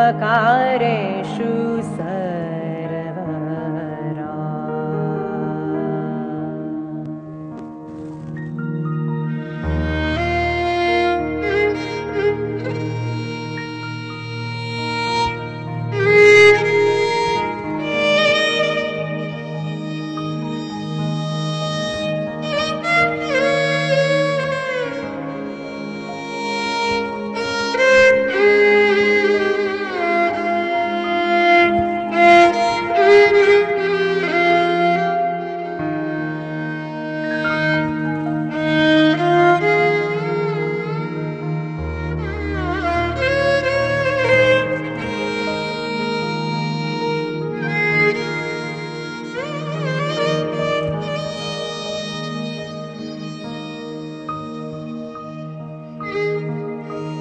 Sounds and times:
Violin, fiddle: 0:00.0 - 0:57.2.

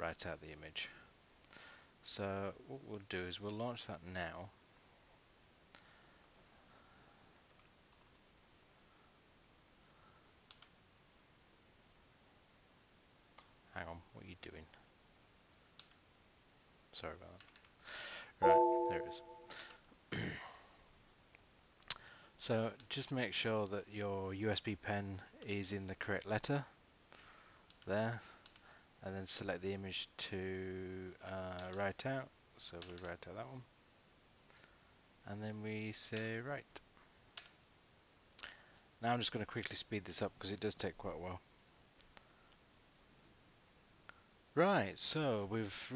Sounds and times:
Speech: 0:00.0 - 0:01.1, 0:02.0 - 0:04.6, 0:13.7 - 0:14.8, 0:16.9 - 0:17.4, 0:22.4 - 0:26.8, 0:27.9 - 0:28.3, 0:29.0 - 0:33.7, 0:35.2 - 0:36.8, 0:39.0 - 0:41.4, 0:44.6 - 0:45.9
Inside, small room: 0:00.0 - 0:45.9
Clicking: 0:10.5 - 0:10.7, 0:15.8 - 0:16.0.

